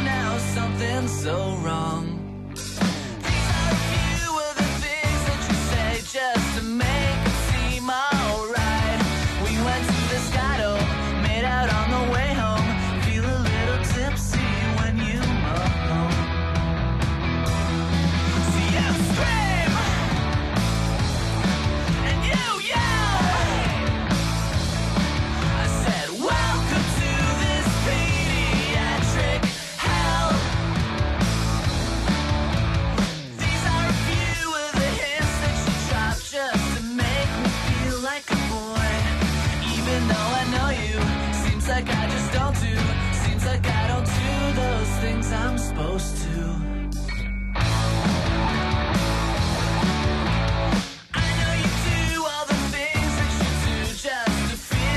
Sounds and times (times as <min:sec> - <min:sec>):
Music: 0:00.0 - 0:54.9.